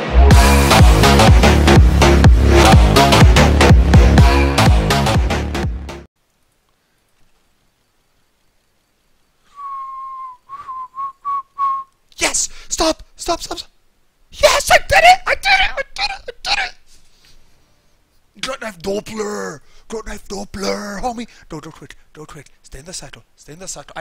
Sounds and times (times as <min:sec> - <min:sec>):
Whistling: 0:09.5 - 0:12.0
Speech: 0:12.2 - 0:13.7, 0:14.3 - 0:16.8, 0:18.4 - 0:24.0.